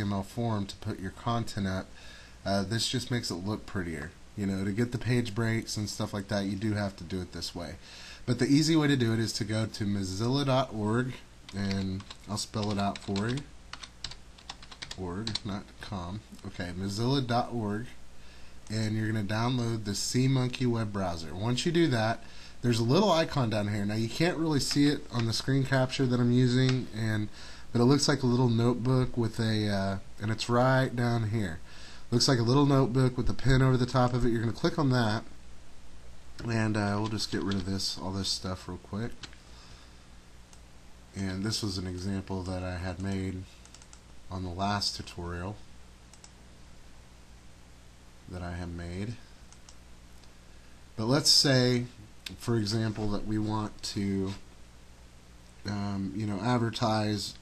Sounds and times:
Speech: 0:00.0 - 0:13.5, 0:14.9 - 0:18.0, 0:18.7 - 0:35.3, 0:36.4 - 0:39.2, 0:41.1 - 0:43.5, 0:44.3 - 0:45.6, 0:48.3 - 0:49.3, 0:51.0 - 0:54.4, 0:55.6 - 0:57.4.

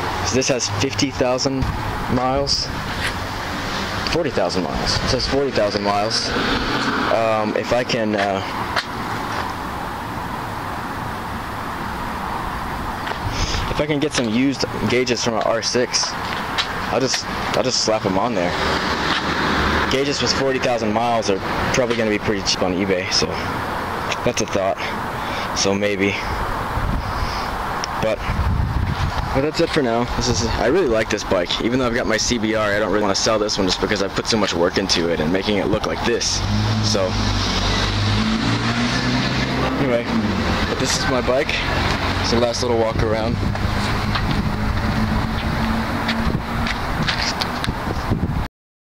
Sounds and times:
Vehicle: 0:00.0 - 0:48.5
Speech: 0:00.2 - 0:02.8, 0:04.1 - 0:06.3, 0:07.1 - 0:08.6, 0:13.7 - 0:16.2, 0:16.9 - 0:18.6, 0:19.9 - 0:23.5, 0:24.1 - 0:26.4, 0:28.0 - 0:28.3, 0:29.3 - 0:37.2, 0:39.6 - 0:43.4.

